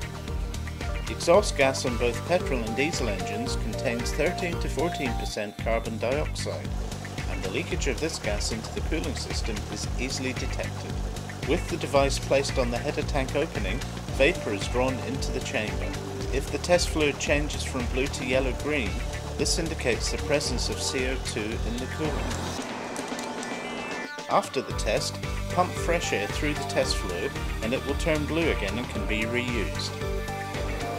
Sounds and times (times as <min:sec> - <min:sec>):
Music: 0:00.0 - 0:30.9
Speech: 0:01.1 - 0:06.7, 0:07.3 - 0:22.4, 0:24.3 - 0:30.0.